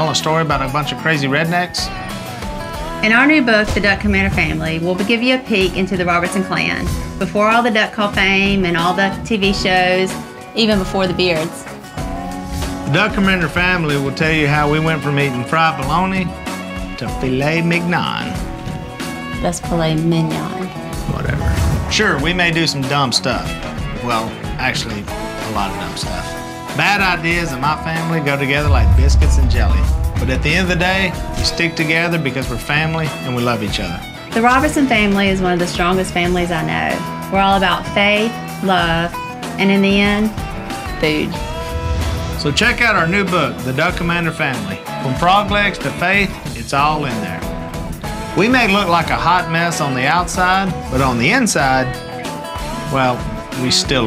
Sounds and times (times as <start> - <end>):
Speech: 0.0 - 1.9, 3.0 - 11.5, 12.9 - 16.3, 17.0 - 18.4, 19.4 - 40.3, 41.0 - 41.4, 42.4 - 47.4, 48.4 - 52.0, 52.9 - 54.0
Music: 0.0 - 54.0.